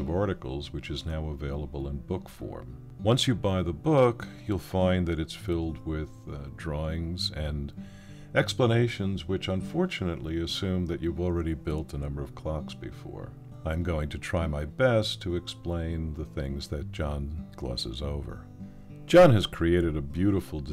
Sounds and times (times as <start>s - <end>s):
Speech: 0.0s - 7.8s, 8.4s - 18.4s, 19.1s - 20.7s
Music: 0.0s - 20.7s.